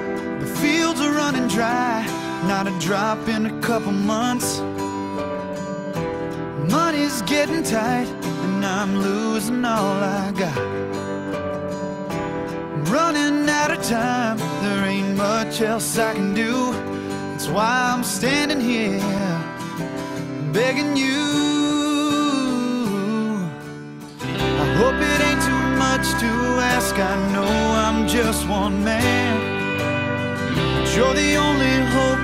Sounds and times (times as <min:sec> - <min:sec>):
Music: 0:00.0 - 0:32.2.